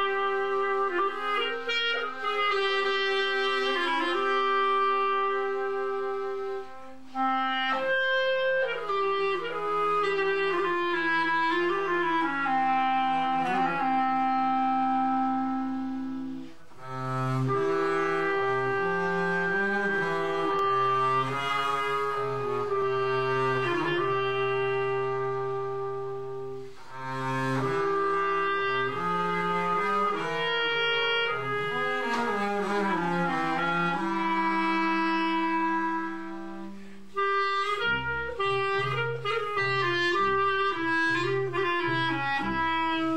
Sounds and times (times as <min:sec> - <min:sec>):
Cello: 0:00.0 - 0:43.1
Clarinet: 0:00.0 - 0:43.1.